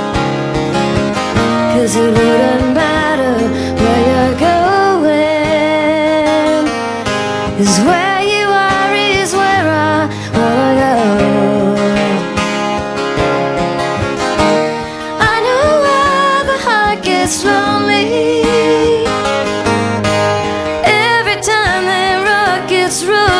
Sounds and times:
Music: 0:00.0 - 0:23.4.

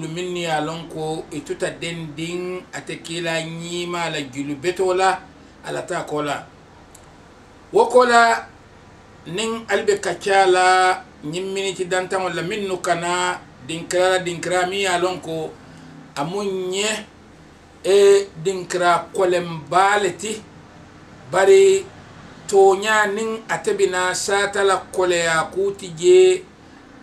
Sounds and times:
Speech: 0:00.0 - 0:06.5, 0:07.7 - 0:08.5, 0:09.3 - 0:15.6, 0:16.2 - 0:17.1, 0:17.8 - 0:20.5, 0:21.3 - 0:21.9, 0:22.5 - 0:26.5.

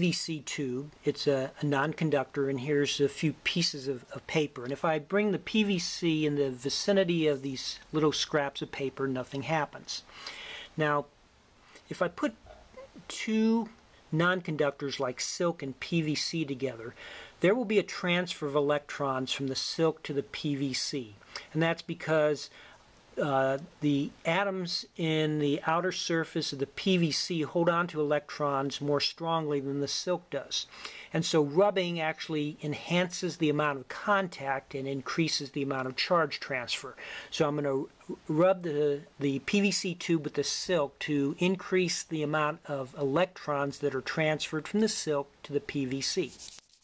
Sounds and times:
Speech: 0:00.0 - 0:10.1, 0:10.8 - 0:11.2, 0:11.8 - 0:22.6, 0:23.2 - 0:46.5.

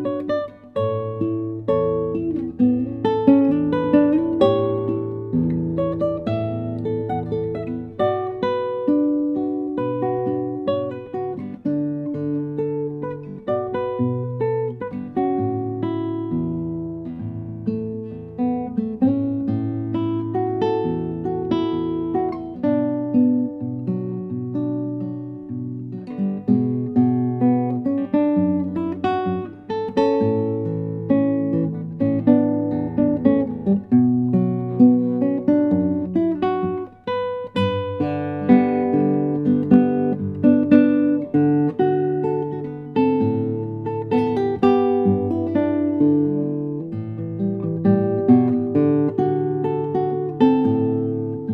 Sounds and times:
Acoustic guitar: 0:00.0 - 0:51.5
Strum: 0:00.0 - 0:51.5.

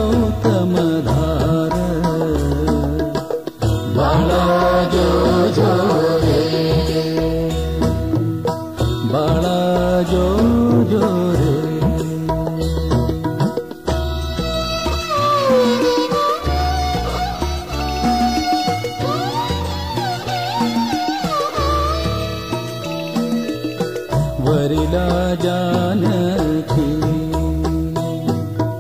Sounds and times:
Music: 0:00.0 - 0:28.8.

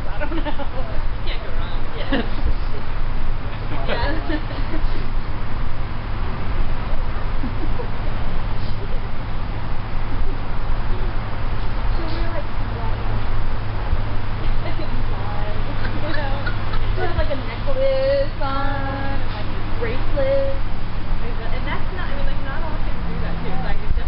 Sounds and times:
Speech: 0:21.2 - 0:24.0.

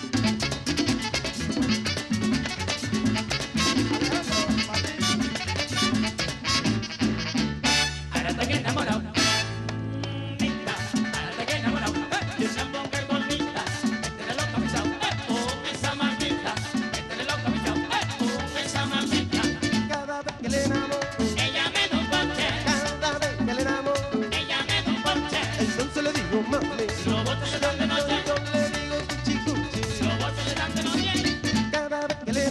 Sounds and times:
Music: 0:00.0 - 0:32.5
Singing: 0:10.1 - 0:32.5.

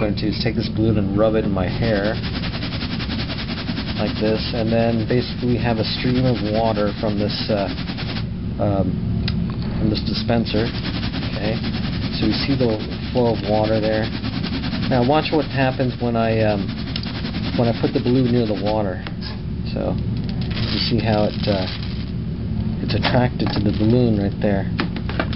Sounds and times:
Speech: 0:00.0 - 0:02.2, 0:04.0 - 0:07.8, 0:08.6 - 0:09.0, 0:09.7 - 0:10.7, 0:11.3 - 0:14.1, 0:14.9 - 0:16.7, 0:17.5 - 0:20.0, 0:20.6 - 0:21.7, 0:22.8 - 0:24.7.

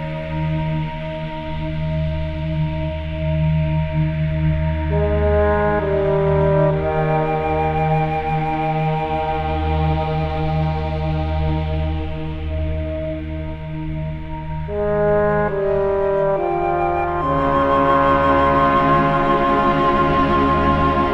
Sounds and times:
Ambient music: 0:00.0 - 0:21.1.

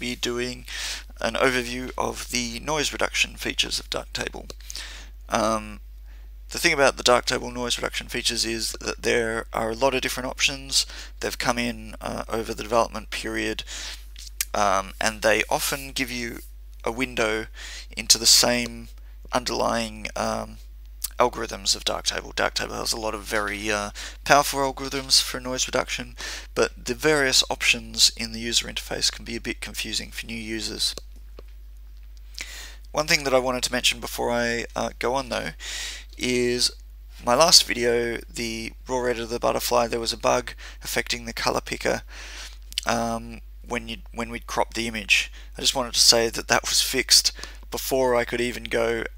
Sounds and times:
Speech: 0:00.0 - 0:04.6, 0:05.3 - 0:05.8, 0:06.5 - 0:13.7, 0:14.3 - 0:31.0, 0:32.9 - 0:42.1, 0:42.8 - 0:49.1.

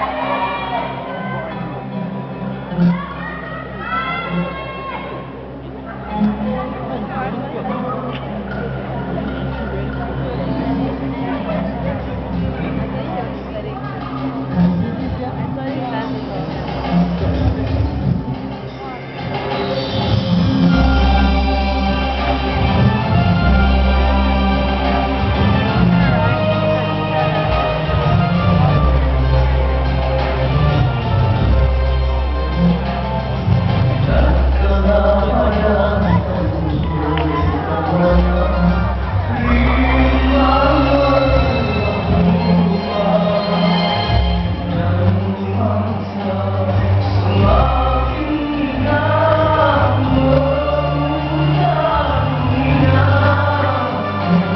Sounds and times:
Music: 0:00.0 - 0:54.5
Speech: 0:02.6 - 0:19.8, 0:34.1 - 0:54.5.

